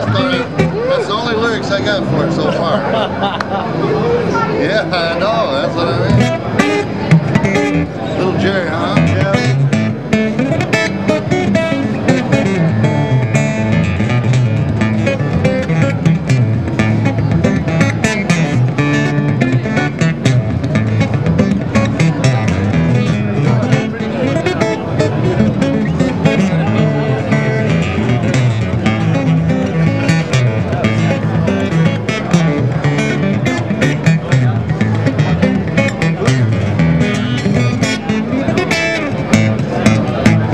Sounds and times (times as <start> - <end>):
Strum: 6.0 - 40.5.